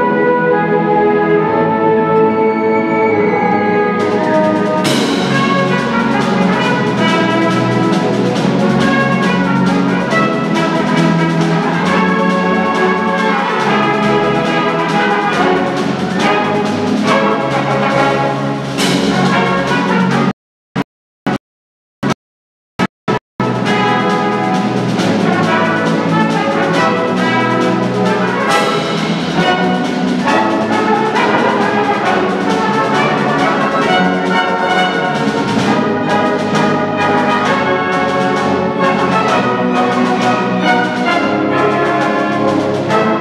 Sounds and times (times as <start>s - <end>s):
Orchestra: 0.0s - 20.3s, 23.4s - 43.2s.